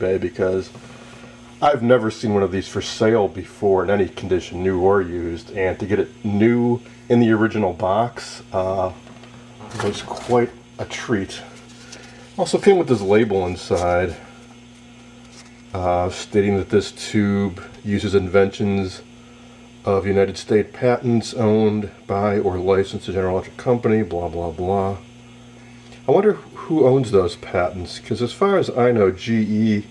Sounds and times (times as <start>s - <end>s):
Speech: 0.0s - 0.8s, 1.6s - 9.0s, 9.6s - 11.6s, 12.4s - 14.3s, 15.7s - 19.1s, 19.8s - 25.1s, 26.1s - 29.9s.